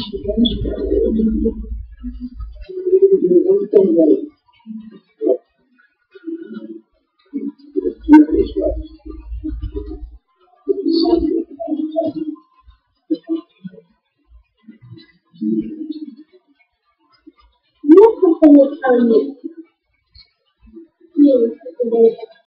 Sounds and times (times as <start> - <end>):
Speech: 0.0 - 5.4, 6.2 - 12.4, 13.1 - 13.8, 14.7 - 16.2, 17.8 - 19.6, 21.2 - 22.4.